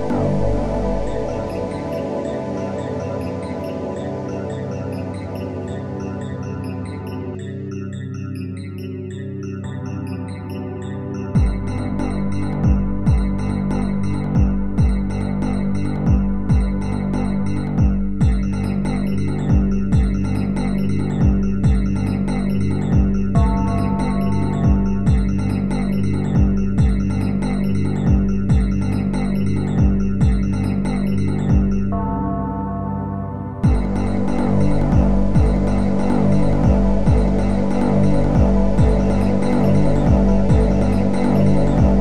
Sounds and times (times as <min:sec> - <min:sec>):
Music: 0:00.0 - 0:42.0.